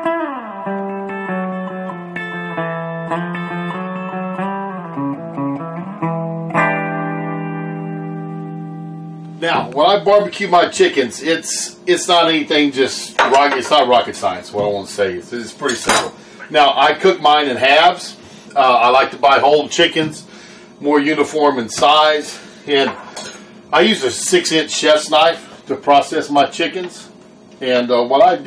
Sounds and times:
Music: 0.0 - 10.0
Speech: 9.4 - 23.0, 23.7 - 28.4.

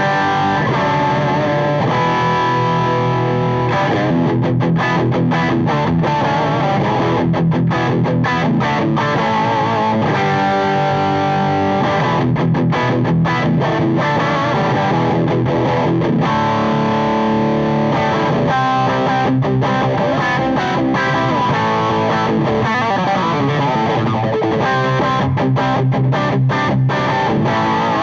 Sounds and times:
Electric guitar: 0.0 - 28.0.

